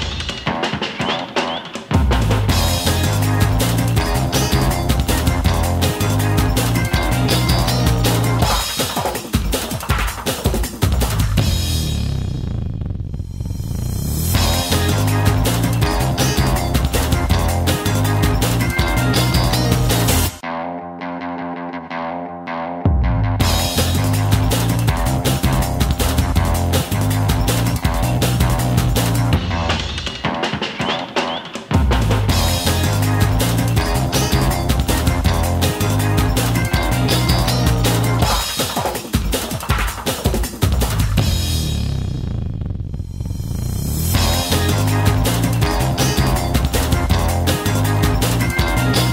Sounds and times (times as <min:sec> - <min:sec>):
Music: 0:00.0 - 0:12.5, 0:13.9 - 0:42.2, 0:43.3 - 0:49.1.